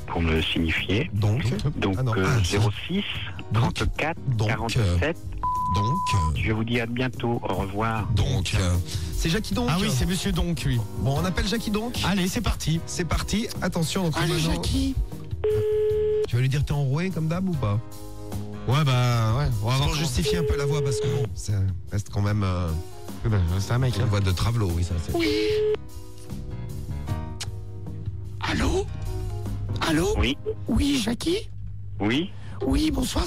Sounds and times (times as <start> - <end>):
Speech: 0.0 - 15.0, 16.3 - 17.8, 18.7 - 25.6, 28.4 - 28.9, 29.8 - 33.2.